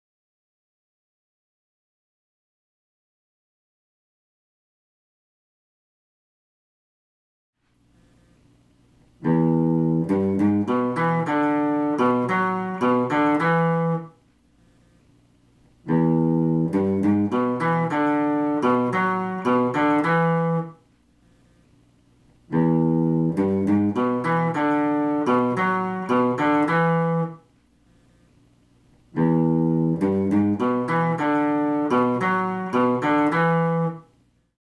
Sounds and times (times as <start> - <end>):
Acoustic guitar: 9.2 - 14.8, 15.9 - 21.5, 22.5 - 28.2, 29.2 - 34.1.